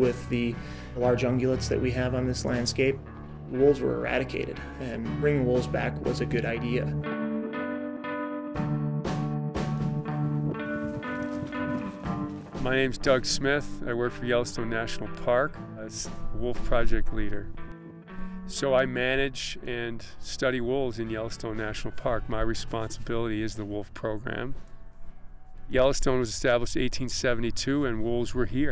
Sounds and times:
Speech: 0:00.0 - 0:07.0, 0:12.6 - 0:17.5, 0:18.5 - 0:24.6, 0:25.7 - 0:28.7
Music: 0:00.0 - 0:28.7.

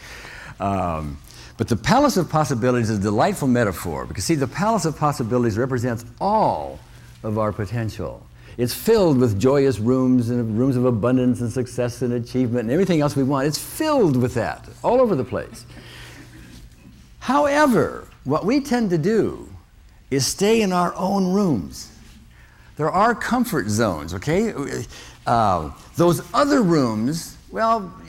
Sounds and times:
Speech: 0:00.6 - 0:15.7, 0:17.2 - 0:22.0, 0:22.8 - 0:28.0.

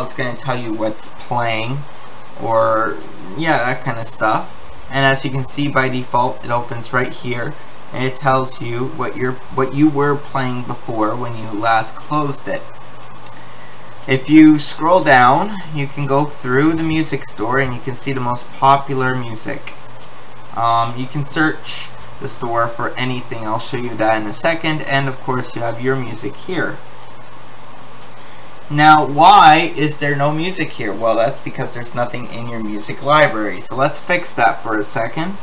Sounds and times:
Speech: 0:00.0 - 0:12.8, 0:14.1 - 0:19.8, 0:20.5 - 0:26.8, 0:28.7 - 0:35.4.

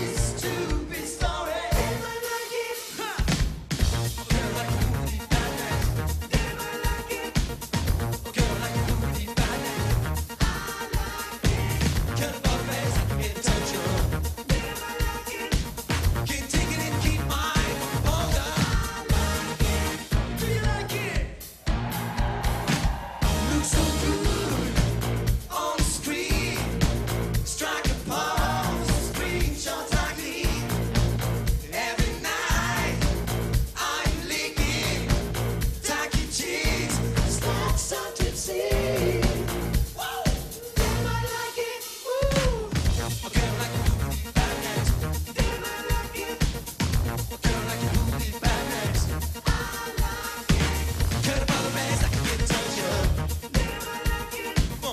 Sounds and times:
Rock and roll: 0:00.0 - 0:54.9.

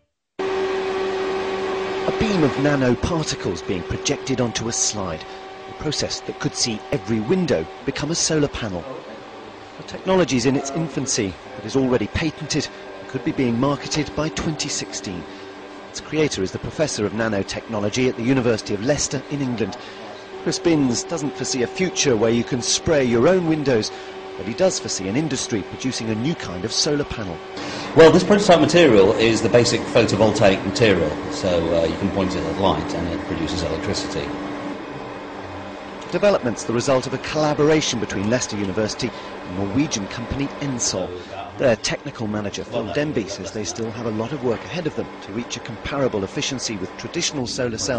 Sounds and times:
Speech: 0:02.1 - 0:15.3, 0:16.0 - 0:34.3, 0:36.0 - 0:47.9.

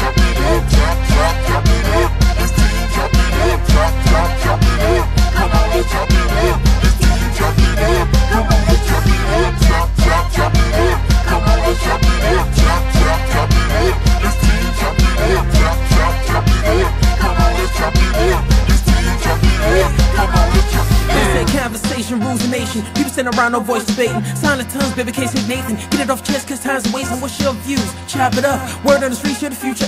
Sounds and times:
Music: 0:00.0 - 0:29.8.

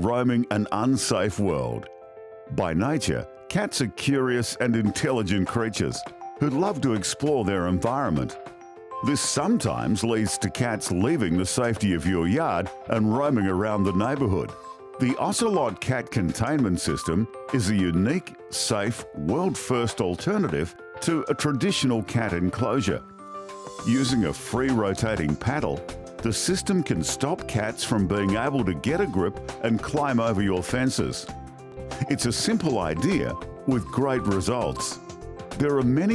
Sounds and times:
Speech: 0:00.0 - 0:01.9, 0:02.5 - 0:08.4, 0:09.0 - 0:23.0, 0:23.9 - 0:31.3, 0:32.0 - 0:35.0, 0:35.6 - 0:36.1
Music: 0:00.0 - 0:36.1.

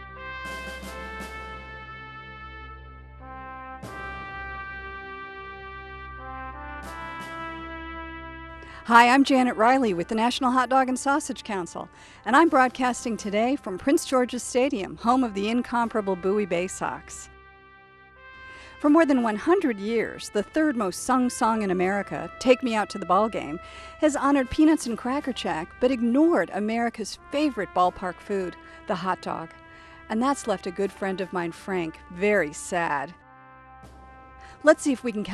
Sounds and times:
Music: 0:00.0 - 0:35.3
Speech: 0:08.9 - 0:17.2, 0:18.8 - 0:29.5, 0:30.1 - 0:33.2, 0:34.6 - 0:35.3.

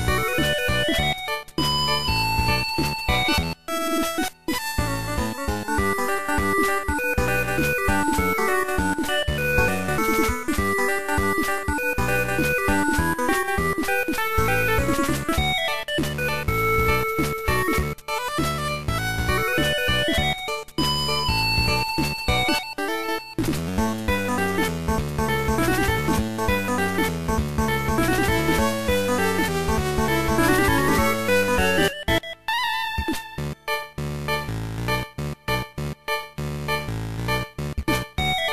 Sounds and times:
Music: 0:00.0 - 0:38.5.

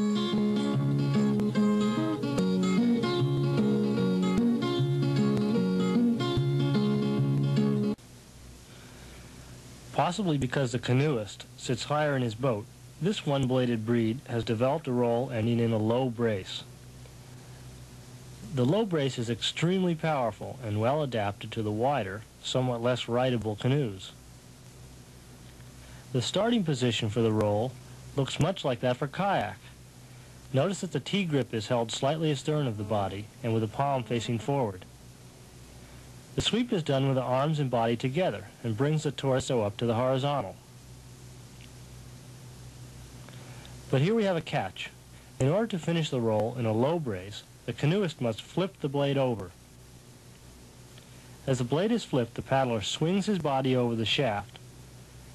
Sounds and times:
Speech: 0:09.9 - 0:16.7, 0:18.4 - 0:24.2, 0:26.1 - 0:29.8, 0:30.5 - 0:34.9, 0:36.4 - 0:40.6, 0:43.9 - 0:49.6, 0:51.4 - 0:54.6.

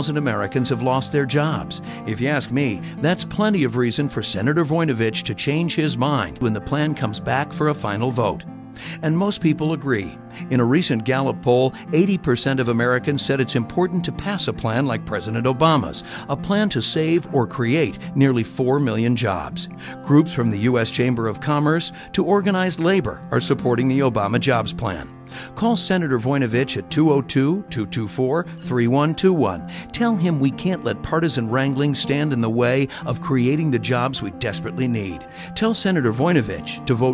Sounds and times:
Speech: 0:00.0 - 0:08.4, 0:09.0 - 0:37.1
Music: 0:00.0 - 0:37.1.

